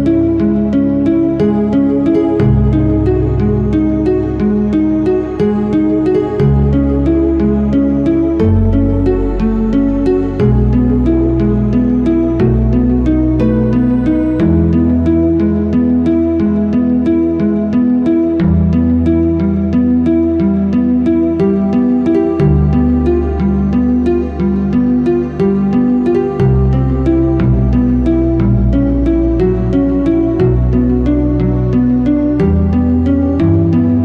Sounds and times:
Classical music: 0.0 - 34.0.

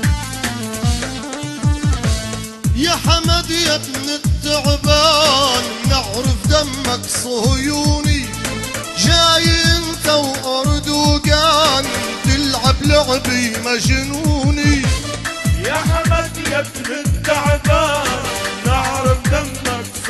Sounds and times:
Soundtrack music: 0.0 - 20.1.

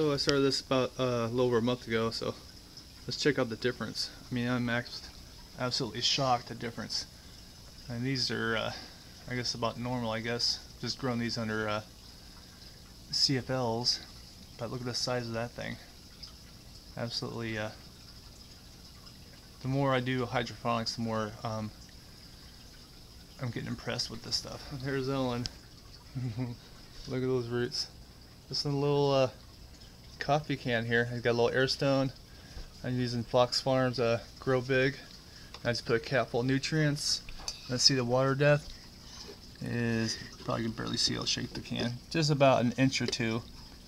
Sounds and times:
Speech: 0.0 - 2.4, 3.1 - 7.1, 7.9 - 11.9, 13.1 - 15.9, 17.0 - 17.8, 19.6 - 21.8, 23.4 - 25.5, 26.2 - 29.4, 30.2 - 32.2, 32.8 - 38.7, 39.6 - 43.5.

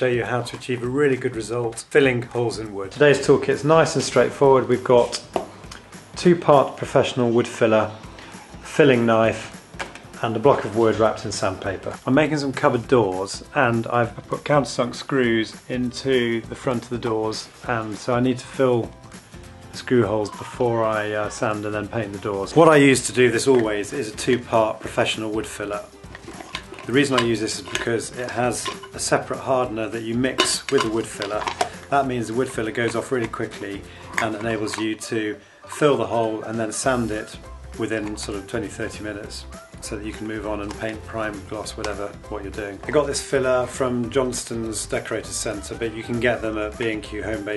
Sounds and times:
Speech: 0.0 - 5.3, 6.2 - 8.0, 8.6 - 9.6, 10.2 - 19.0, 19.8 - 25.9, 26.9 - 47.5
Music: 0.0 - 47.5.

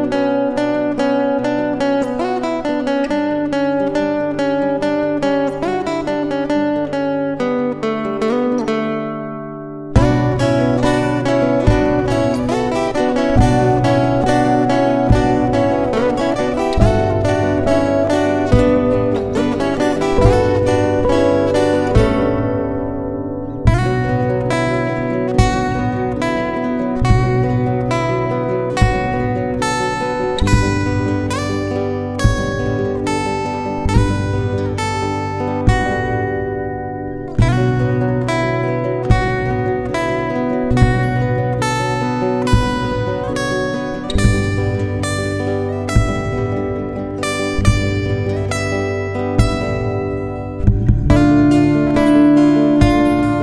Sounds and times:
Acoustic guitar: 0.0 - 53.4
Strum: 0.0 - 53.4.

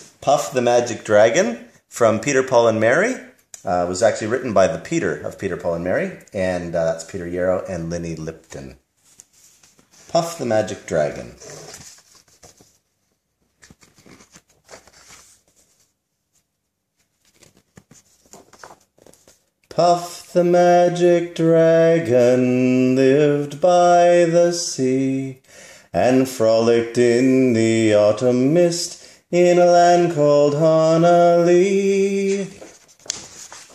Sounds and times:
Inside, small room: 0.0 - 33.7
Speech: 0.2 - 8.8, 10.1 - 11.6.

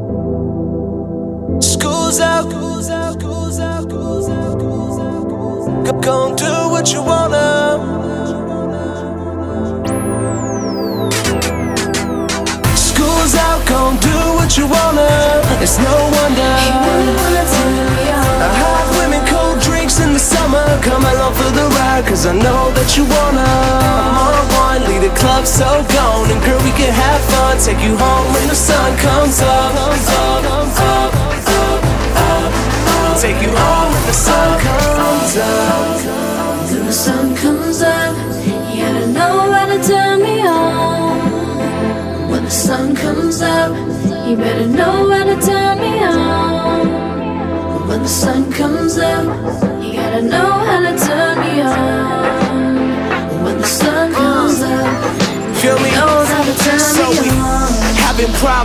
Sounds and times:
Music: 0.0 - 58.6.

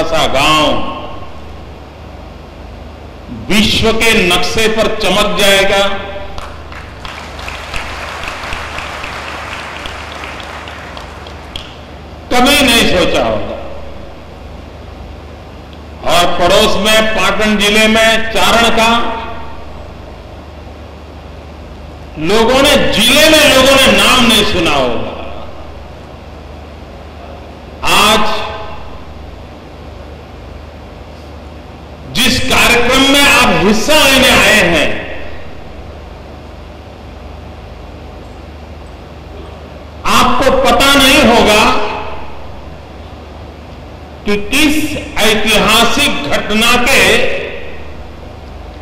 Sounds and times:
Male speech, man speaking: 0.0 - 1.0, 3.4 - 6.2, 12.3 - 13.7, 16.0 - 19.4, 22.2 - 25.4, 27.8 - 28.7, 32.1 - 35.2, 40.1 - 42.2, 44.3 - 47.7.

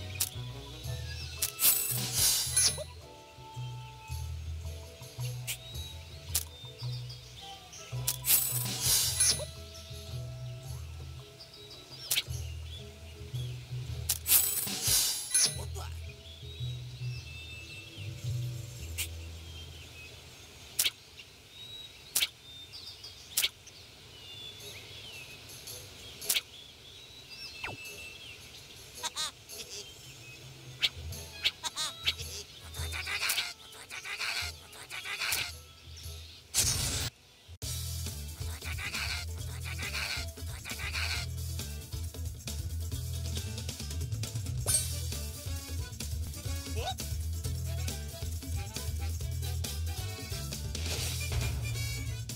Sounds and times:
Bird vocalization, bird call, bird song: 0.0 - 8.3, 9.2 - 13.8, 15.4 - 36.6.

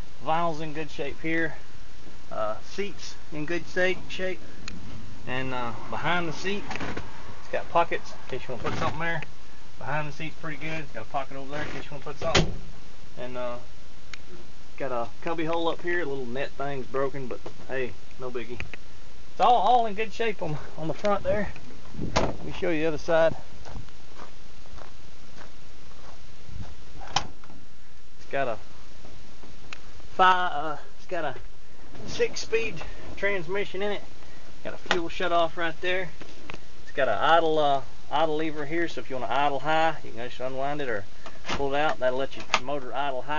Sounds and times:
Speech: 0.2 - 1.6, 2.3 - 4.4, 5.3 - 6.7, 7.5 - 9.2, 9.8 - 12.5, 13.2 - 13.7, 14.8 - 18.6, 19.4 - 21.6, 22.4 - 23.4, 28.2 - 28.6, 30.2 - 36.2, 36.9 - 43.3.

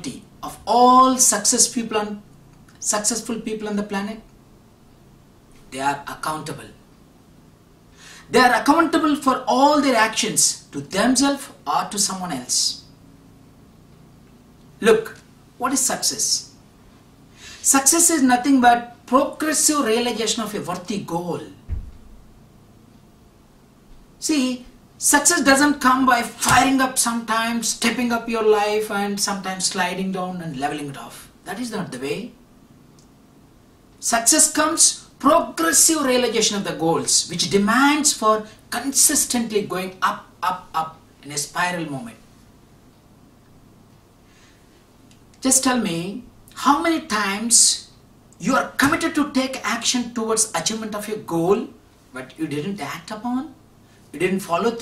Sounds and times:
Male speech, man speaking: 0.0 - 2.2, 2.8 - 4.2, 5.7 - 6.8, 8.3 - 12.9, 14.8 - 16.6, 17.6 - 21.6, 24.2 - 32.4, 34.0 - 42.2, 45.4 - 53.6, 54.2 - 54.8.

